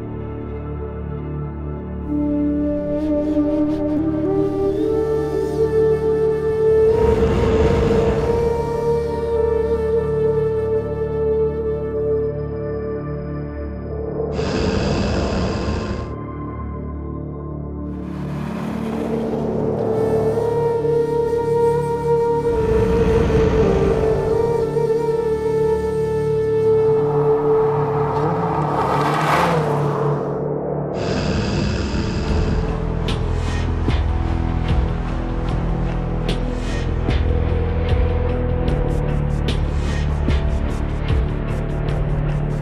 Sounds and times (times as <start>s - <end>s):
Music: 0.0s - 42.6s.